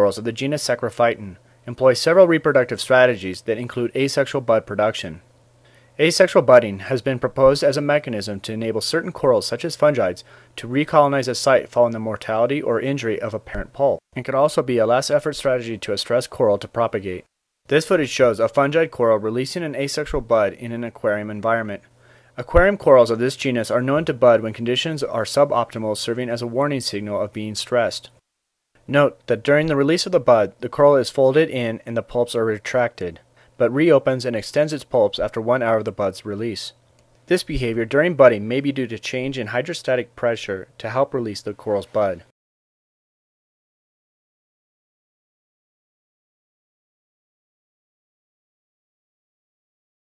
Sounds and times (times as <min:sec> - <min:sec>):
Speech: 0:00.0 - 0:05.2, 0:06.0 - 0:28.2, 0:28.9 - 0:42.3.